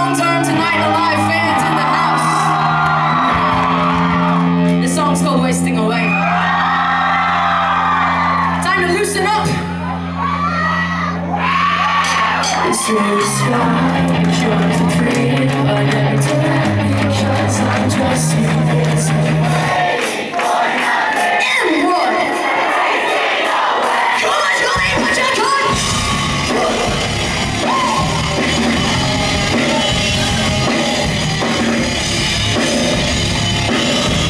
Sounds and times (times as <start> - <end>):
Inside, public space: 0.0 - 34.2
Music: 0.0 - 34.2
Singing: 12.6 - 25.8.